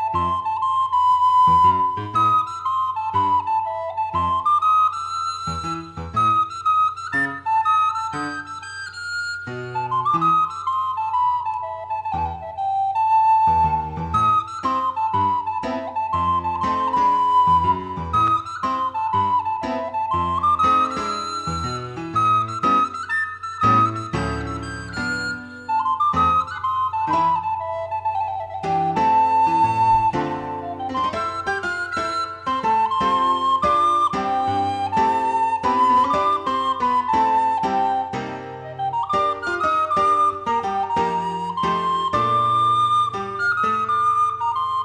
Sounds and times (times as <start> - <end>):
Flute: 0.0 - 44.8.